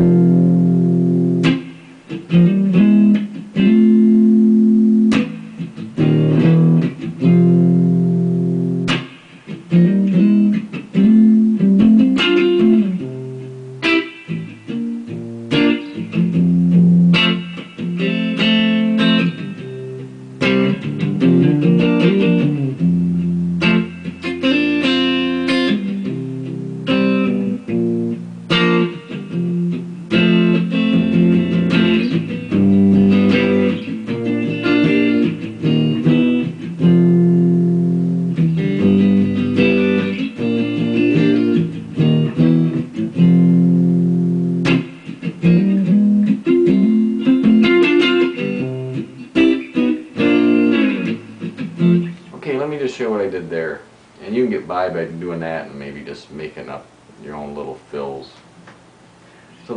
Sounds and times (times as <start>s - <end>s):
Electric guitar: 0.0s - 56.4s.